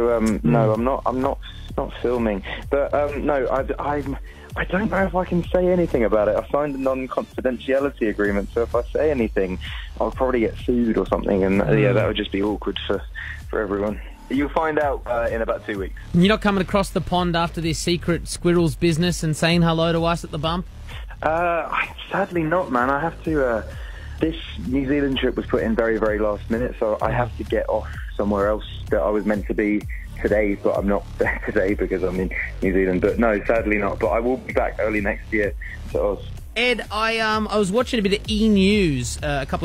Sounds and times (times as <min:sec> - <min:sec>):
Music: 0:00.0 - 0:39.6
Speech: 0:00.0 - 0:39.6.